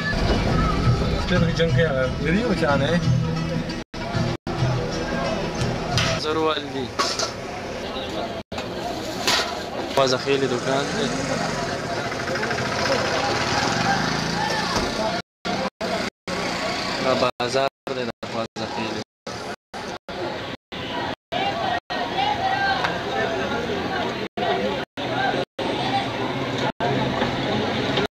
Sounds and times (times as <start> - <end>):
Vehicle: 3.6 - 28.1.